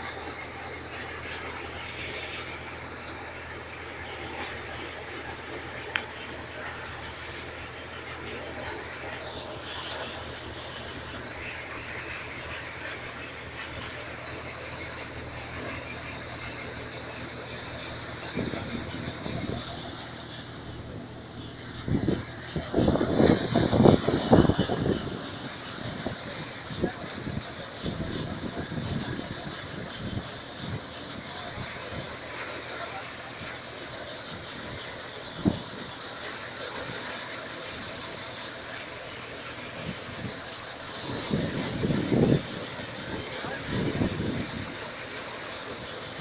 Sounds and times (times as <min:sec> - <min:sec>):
Vehicle: 0:00.0 - 0:46.2
Speech: 0:25.8 - 0:34.8, 0:39.9 - 0:45.1.